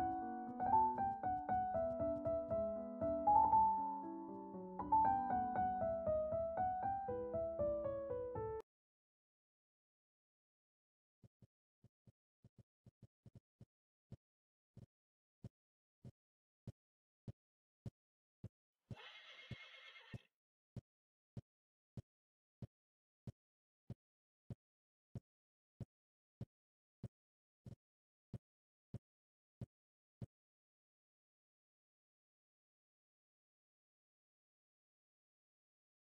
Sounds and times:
Neigh, whinny: 0:19.0 - 0:20.2.

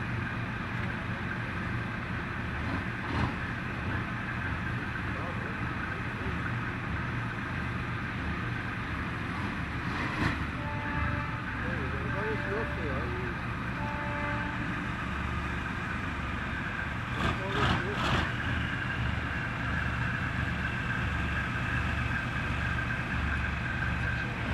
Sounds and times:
Speech: 0:05.1 - 0:06.5, 0:11.6 - 0:13.4, 0:17.3 - 0:18.2.

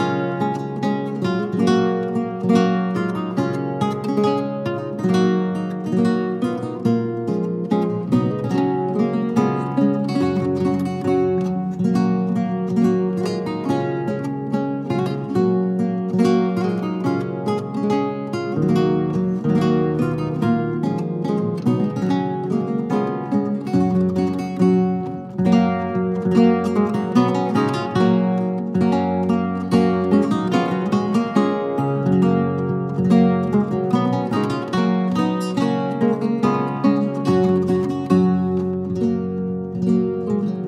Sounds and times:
Acoustic guitar: 0:00.0 - 0:40.6
Strum: 0:00.0 - 0:40.6.

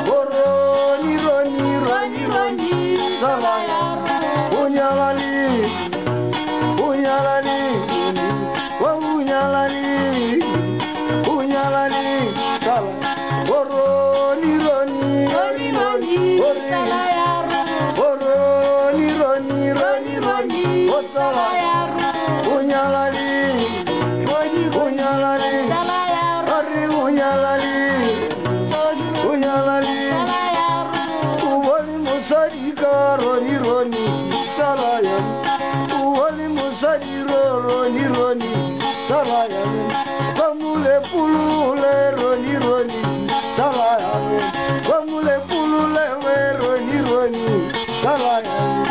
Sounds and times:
Acoustic guitar: 0:00.0 - 0:48.9
Strum: 0:00.0 - 0:48.9.

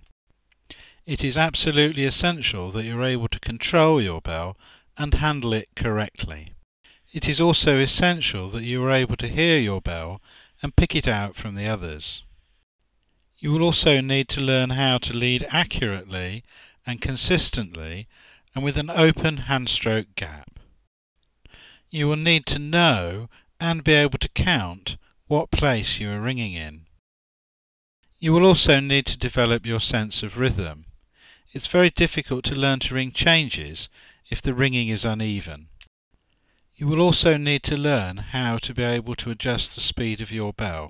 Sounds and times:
Speech: 0:01.1 - 0:06.6, 0:07.2 - 0:12.2, 0:13.4 - 0:20.6, 0:21.9 - 0:26.8, 0:28.2 - 0:30.9, 0:31.5 - 0:35.7, 0:36.8 - 0:40.9.

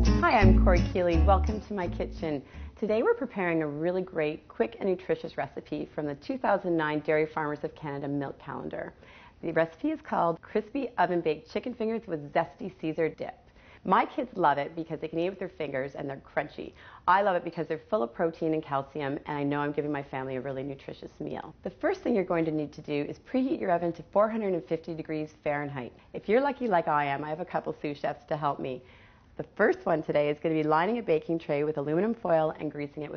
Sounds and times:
Speech: 0:00.2 - 0:28.8, 0:29.4 - 0:33.1.

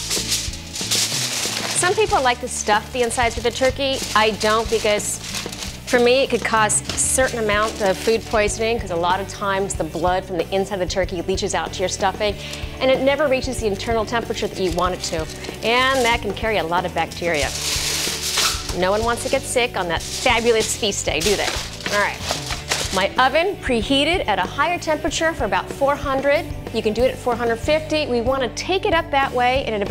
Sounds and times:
Music: 0:00.0 - 0:29.9
Speech: 0:01.8 - 0:05.2, 0:05.9 - 0:17.6, 0:18.7 - 0:22.2, 0:22.9 - 0:29.9.

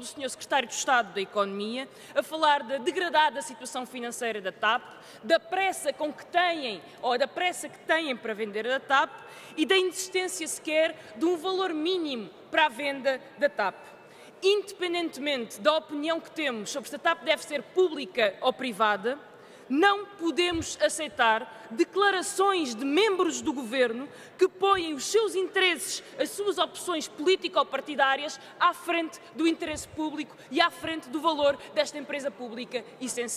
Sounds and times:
Speech: 0:00.0 - 0:13.8, 0:14.4 - 0:33.3.

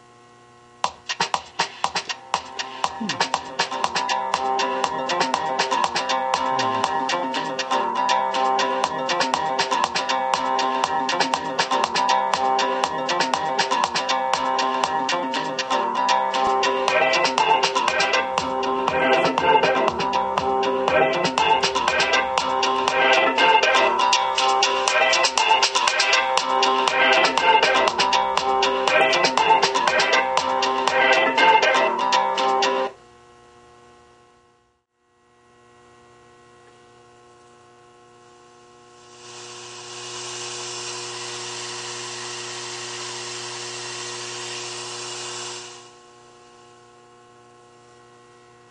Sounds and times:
Music: 0:00.8 - 0:33.0.

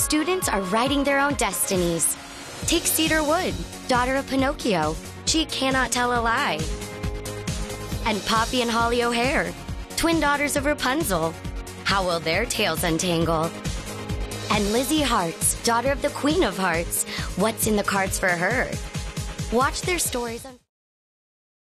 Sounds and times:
Speech: 0:00.0 - 0:06.7, 0:08.0 - 0:13.5, 0:14.5 - 0:18.8, 0:19.5 - 0:20.7
Music: 0:00.0 - 0:20.7.

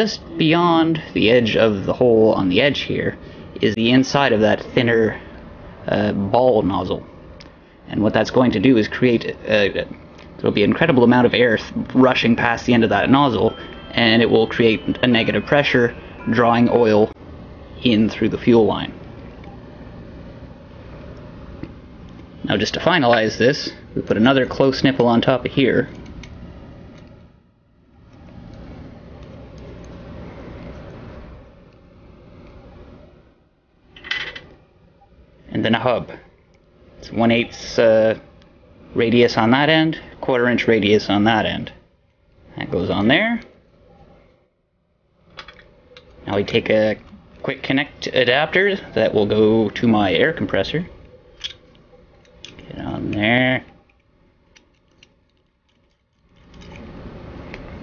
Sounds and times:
Speech: 0:00.0 - 0:05.2, 0:05.9 - 0:07.0, 0:07.9 - 0:17.2, 0:17.8 - 0:19.0, 0:22.4 - 0:25.9, 0:35.5 - 0:36.3, 0:37.0 - 0:38.3, 0:39.0 - 0:41.8, 0:42.6 - 0:43.5, 0:46.2 - 0:51.0, 0:52.6 - 0:53.7
Inside, small room: 0:00.0 - 0:57.8.

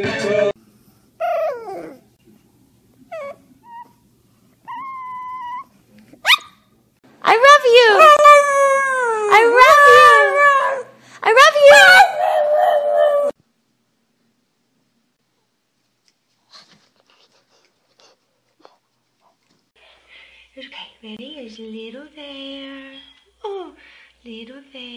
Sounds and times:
Whimper (dog): 0:01.2 - 0:02.0, 0:03.1 - 0:04.0, 0:04.7 - 0:05.7
Speech: 0:07.2 - 0:08.2, 0:11.2 - 0:12.1, 0:20.6 - 0:24.9.

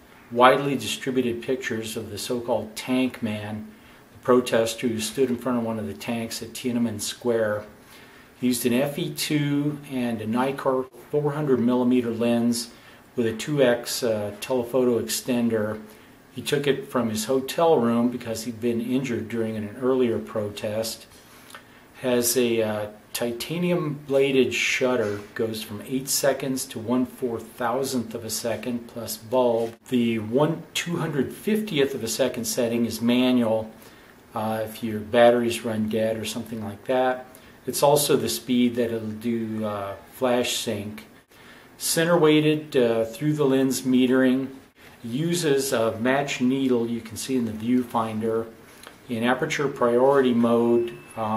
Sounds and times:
Speech: 0:00.3 - 0:07.8, 0:08.4 - 0:21.1, 0:22.0 - 0:41.2, 0:41.8 - 0:51.3.

